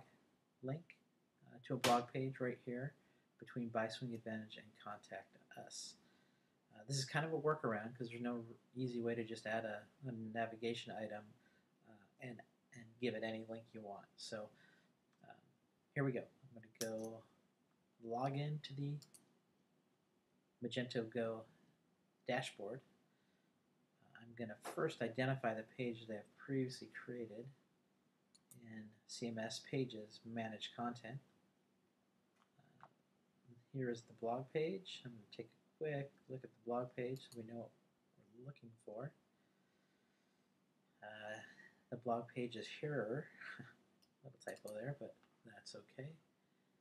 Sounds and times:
Speech: 0.0s - 6.0s, 6.7s - 14.6s, 16.0s - 17.3s, 18.0s - 19.2s, 20.6s - 21.6s, 22.3s - 22.9s, 24.1s - 27.6s, 28.6s - 31.3s, 33.6s - 39.2s, 41.0s - 46.3s.

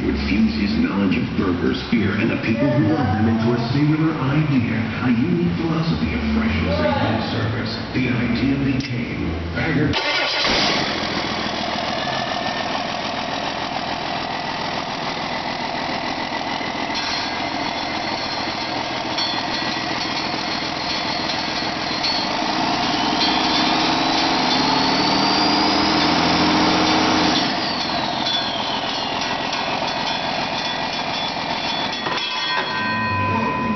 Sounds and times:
Heavy engine (low frequency): 0.0s - 33.7s
Idling: 10.0s - 32.3s.

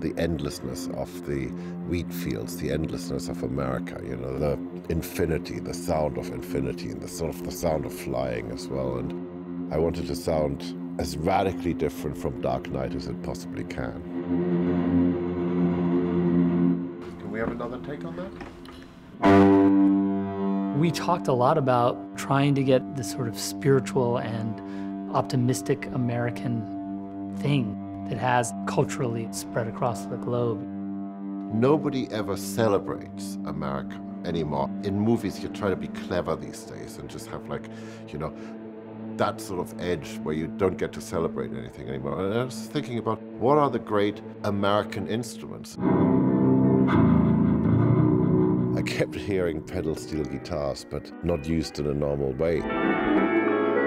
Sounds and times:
Speech: 0.0s - 14.0s, 17.1s - 18.4s, 20.8s - 26.7s, 27.4s - 30.6s, 31.5s - 38.4s, 39.2s - 45.8s, 48.8s - 52.7s.

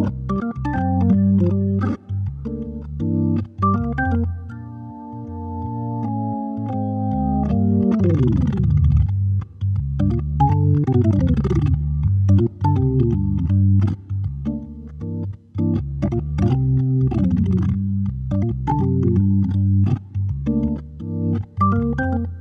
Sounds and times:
Electronic organ: 0.0s - 22.4s.

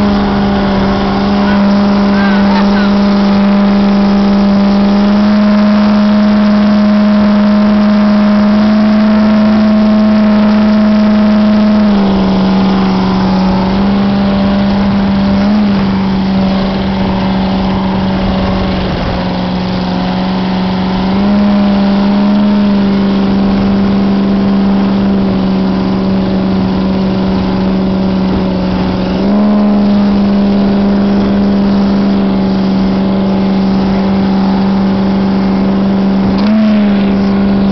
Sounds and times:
Motorboat, speedboat: 0.0s - 37.7s.

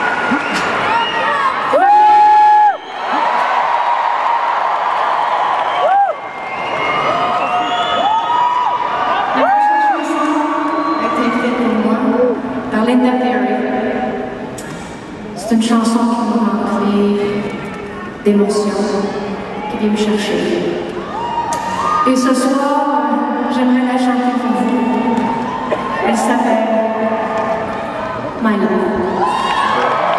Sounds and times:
Female speech, woman speaking: 9.4s - 14.0s, 15.4s - 17.5s, 18.2s - 20.7s, 22.1s - 25.2s, 26.0s - 27.4s, 28.4s - 29.2s.

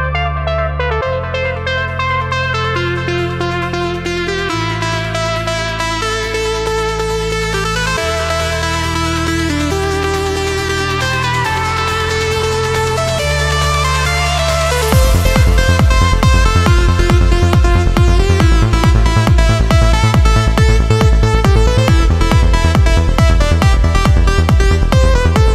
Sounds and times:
Music: 0.0s - 25.5s.

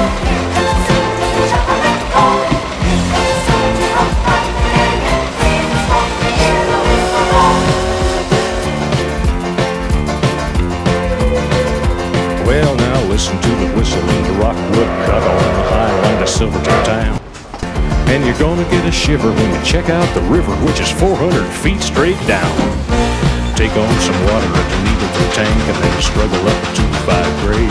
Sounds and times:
Music: 0.0s - 27.7s.

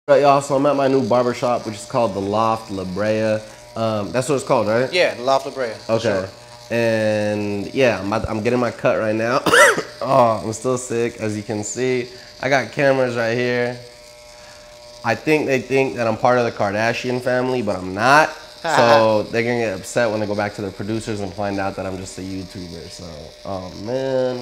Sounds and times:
Electric shaver, electric razor: 0.1s - 24.4s.

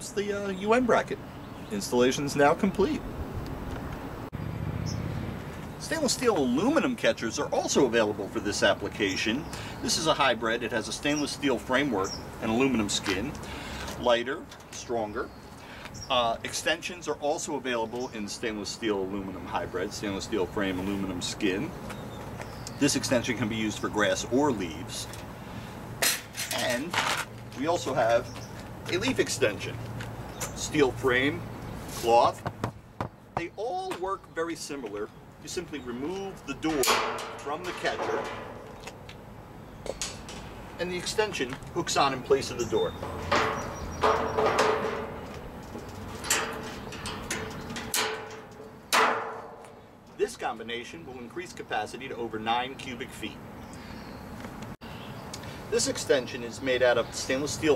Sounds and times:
Speech: 0.0s - 3.0s, 5.8s - 13.4s, 14.0s - 15.3s, 16.1s - 21.8s, 22.8s - 25.2s, 26.5s - 28.3s, 28.9s - 29.8s, 30.6s - 32.4s, 33.4s - 38.3s, 40.8s - 43.0s, 50.2s - 53.4s, 55.7s - 57.7s.

